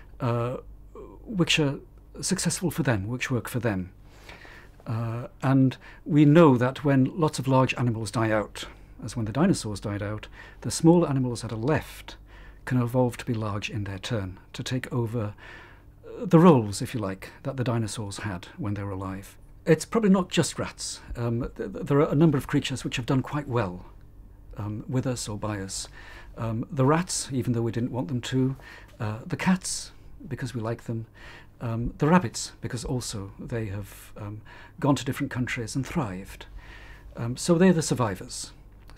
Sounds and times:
Speech: 0:00.2 - 0:04.0, 0:04.8 - 0:15.4, 0:16.1 - 0:36.5, 0:37.2 - 0:38.9.

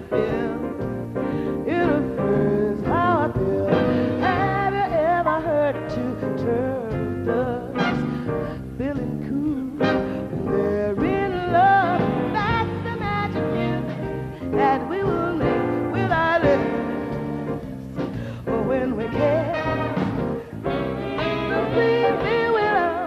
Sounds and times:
Music: 0:00.0 - 0:23.0.

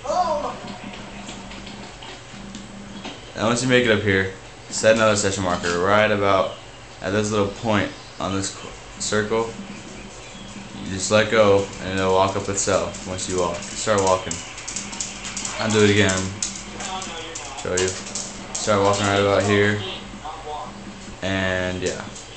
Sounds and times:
Speech: 0:03.4 - 0:09.5, 0:10.9 - 0:14.4, 0:15.5 - 0:22.2.

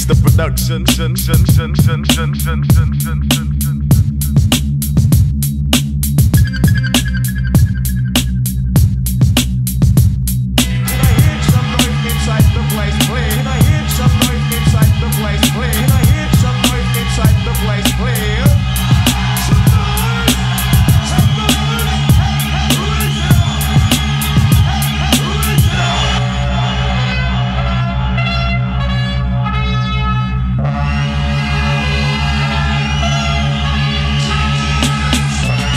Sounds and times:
Music: 0:00.0 - 0:35.7.

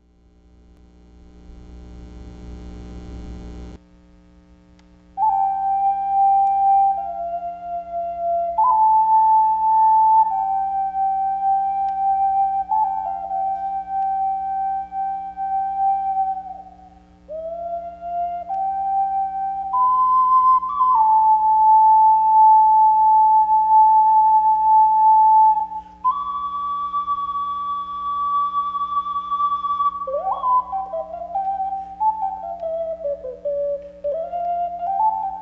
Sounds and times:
Music: 0:04.8 - 0:35.4.

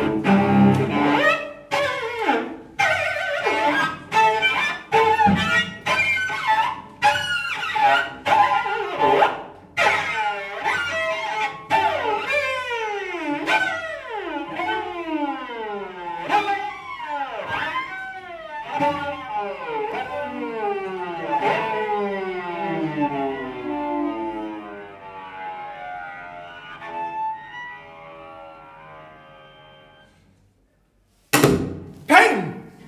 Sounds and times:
Cello: 0:00.0 - 0:30.3.

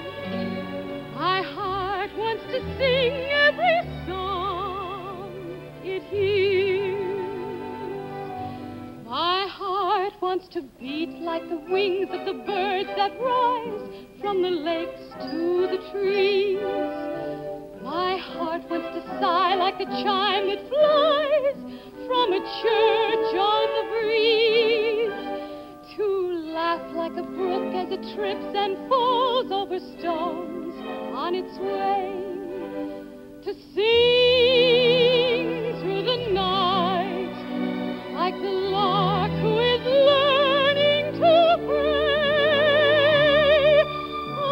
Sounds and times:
Tender music: 0:00.0 - 0:10.1, 0:10.8 - 0:44.5.

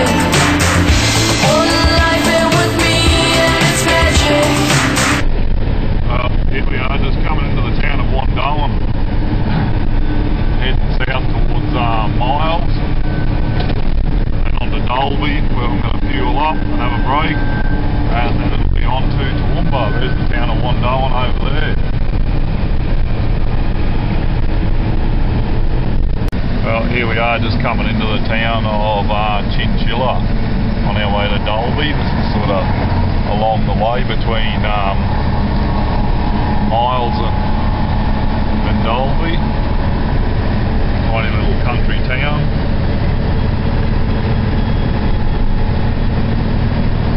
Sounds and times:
Outside, rural or natural: 0:00.0 - 0:47.1
Truck: 0:00.0 - 0:47.1
Speech: 0:06.1 - 0:08.8, 0:10.6 - 0:12.8, 0:14.5 - 0:17.4, 0:18.1 - 0:21.8, 0:26.6 - 0:32.7, 0:33.3 - 0:35.0, 0:36.7 - 0:37.4, 0:38.7 - 0:39.4, 0:41.1 - 0:42.5.

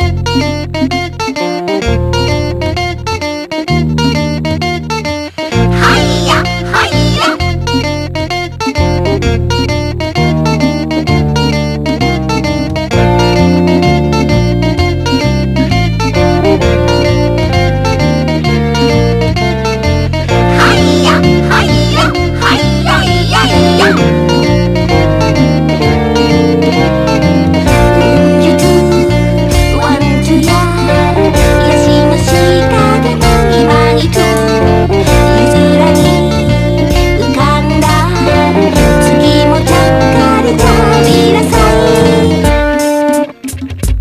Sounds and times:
Pop music: 0:05.4 - 0:07.5, 0:20.3 - 0:24.6, 0:27.4 - 0:43.3.

